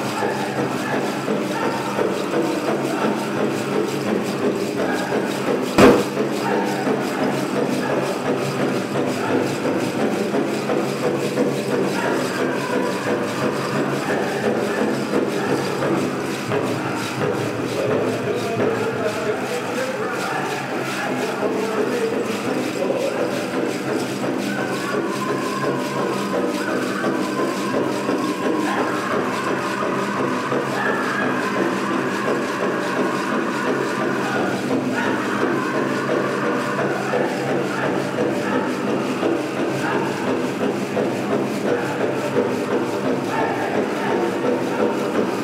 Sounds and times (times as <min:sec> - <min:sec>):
Speech: 0:00.0 - 0:45.4.